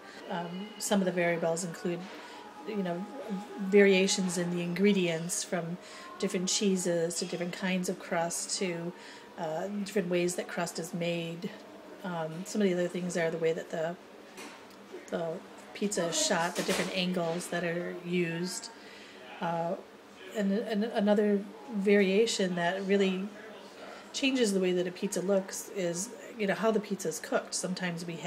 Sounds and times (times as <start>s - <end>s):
Speech: 0.2s - 14.0s, 15.0s - 18.8s, 19.4s - 28.2s.